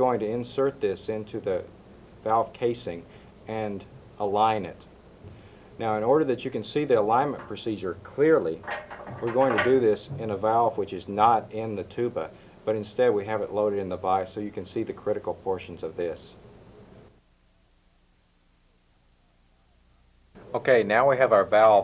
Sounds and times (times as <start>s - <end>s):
Speech: 0.0s - 4.9s, 5.8s - 16.4s, 20.5s - 21.8s.